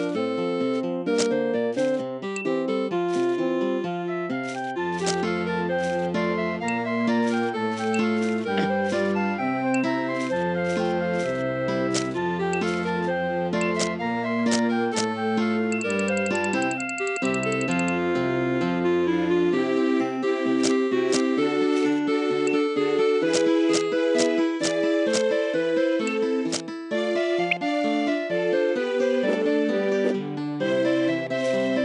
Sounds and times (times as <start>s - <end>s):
Music: 0.0s - 31.8s.